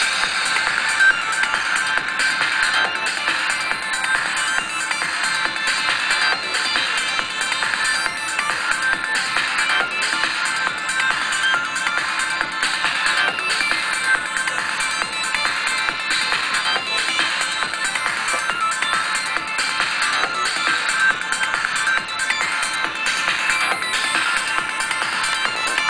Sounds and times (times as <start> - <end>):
Music: 0.0 - 25.9.